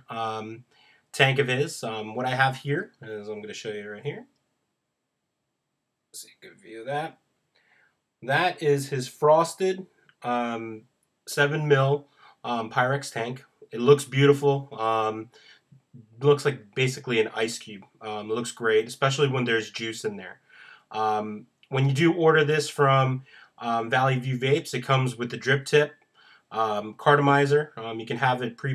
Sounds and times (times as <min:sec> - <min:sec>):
Speech: 0:00.0 - 0:00.6, 0:01.2 - 0:04.2, 0:06.2 - 0:07.1, 0:08.2 - 0:15.4, 0:16.0 - 0:25.9, 0:26.6 - 0:28.7.